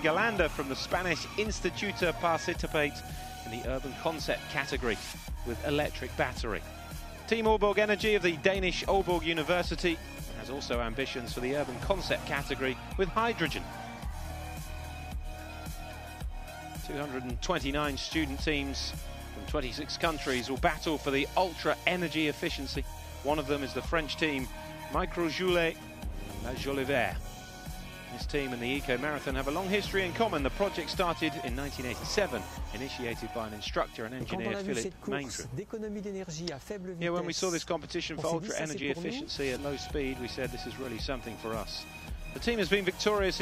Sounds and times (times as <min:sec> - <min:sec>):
Speech: 0:00.0 - 0:06.6, 0:07.3 - 0:13.6, 0:16.9 - 0:25.8, 0:26.4 - 0:27.2, 0:28.1 - 0:41.8, 0:42.4 - 0:43.4
Music: 0:00.0 - 0:43.4.